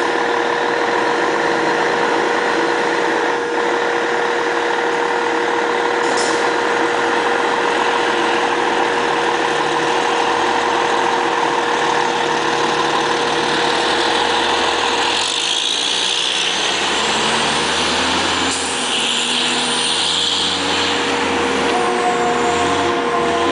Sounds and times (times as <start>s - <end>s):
Truck: 0.0s - 23.5s.